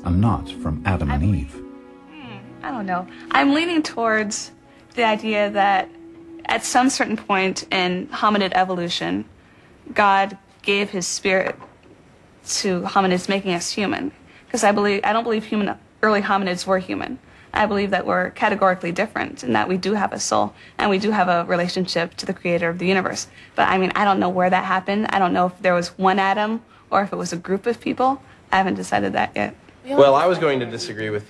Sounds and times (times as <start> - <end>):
Female speech, woman speaking: 2.2 - 9.3, 9.9 - 11.6, 12.5 - 30.6.